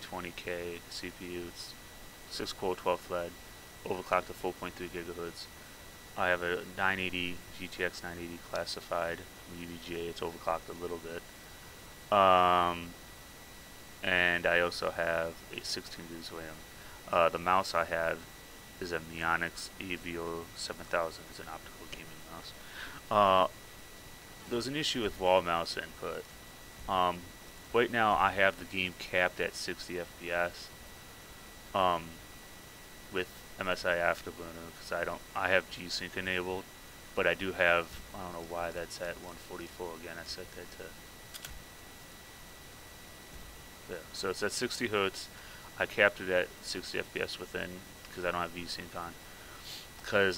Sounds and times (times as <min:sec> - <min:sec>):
Speech: 0:00.0 - 0:05.5, 0:06.2 - 0:11.2, 0:12.1 - 0:13.0, 0:14.0 - 0:23.5, 0:24.4 - 0:26.2, 0:26.9 - 0:30.7, 0:31.8 - 0:32.2, 0:33.1 - 0:41.0, 0:43.9 - 0:49.2, 0:50.0 - 0:50.3.